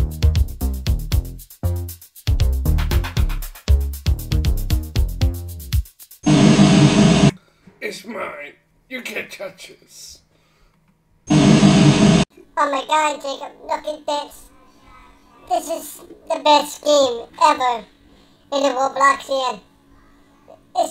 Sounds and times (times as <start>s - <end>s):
Speech: 7.8s - 10.2s, 12.6s - 17.9s, 18.5s - 19.7s, 20.4s - 20.9s.